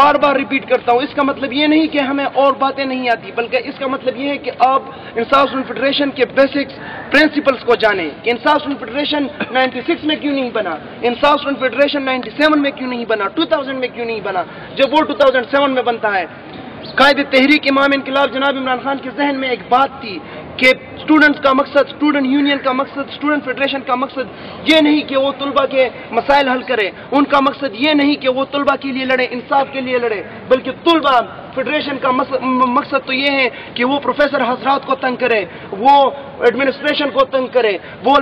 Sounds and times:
Male speech, man speaking: 0.0 - 38.2
Narration, monologue: 0.0 - 38.2.

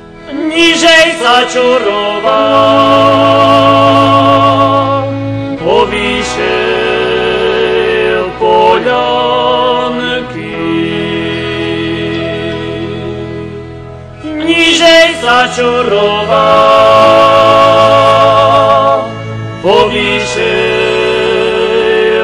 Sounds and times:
Folk music: 0.0 - 22.2.

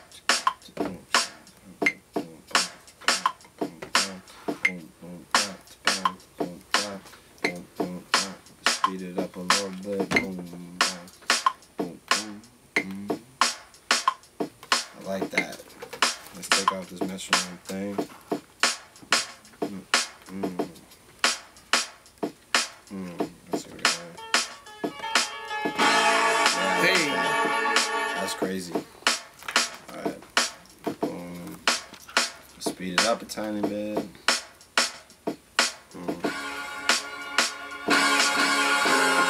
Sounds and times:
Music: 0.0 - 39.3
Speech: 0.7 - 2.4, 3.6 - 11.1, 11.8 - 13.2, 15.0 - 15.6, 16.4 - 18.1, 19.6 - 20.8, 22.9 - 24.2, 26.6 - 27.3, 28.2 - 28.9, 29.9 - 30.2, 31.0 - 31.6, 32.6 - 34.2, 36.0 - 36.3.

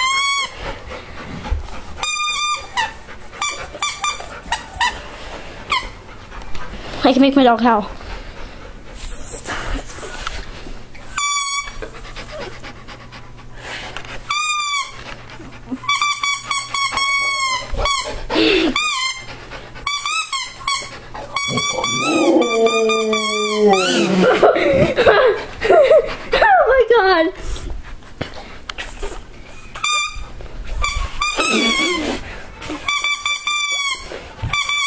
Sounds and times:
Howl: 21.7 - 24.4.

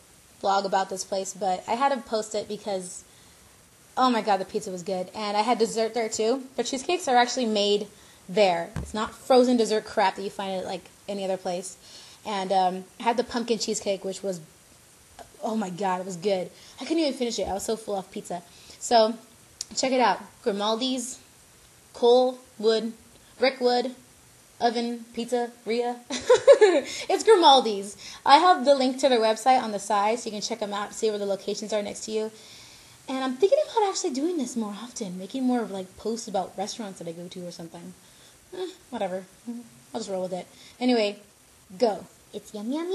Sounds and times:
Inside, small room: 0.0 - 42.9
Speech: 0.4 - 3.0, 4.0 - 14.5, 15.2 - 21.2, 22.0 - 24.0, 24.6 - 26.1, 26.8 - 32.4, 33.1 - 38.0, 38.6 - 42.9.

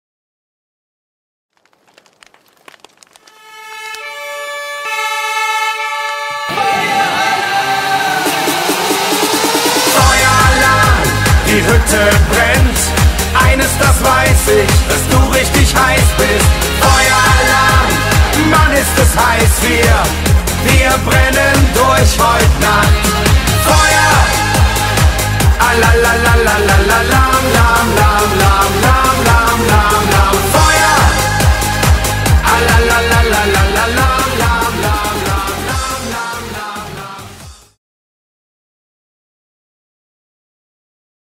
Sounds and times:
Electronic dance music: 4.0 - 37.8.

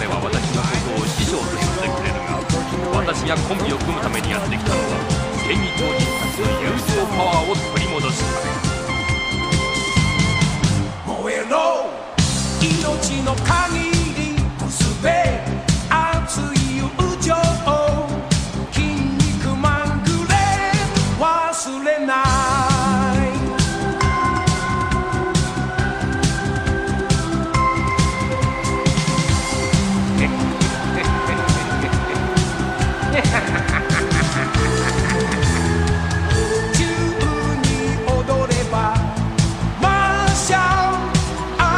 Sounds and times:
Music: 0.0 - 41.7.

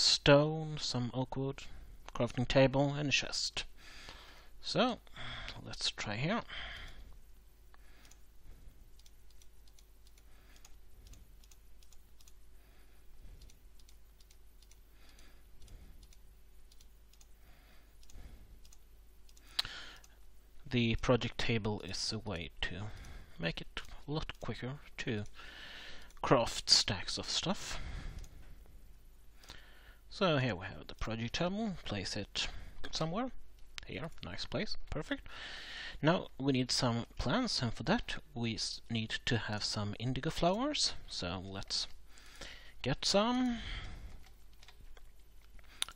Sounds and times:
Speech: 0.0 - 3.7, 4.6 - 5.0, 20.7 - 25.3, 26.2 - 27.8, 30.1 - 35.2, 36.0 - 42.0, 42.8 - 43.7.

